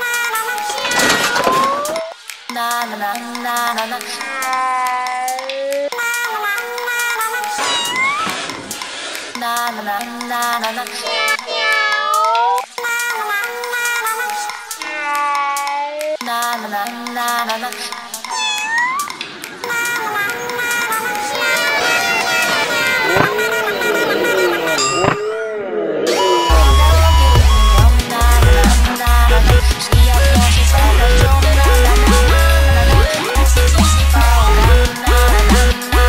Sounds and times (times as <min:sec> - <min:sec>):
Dubstep: 0:26.1 - 0:36.0.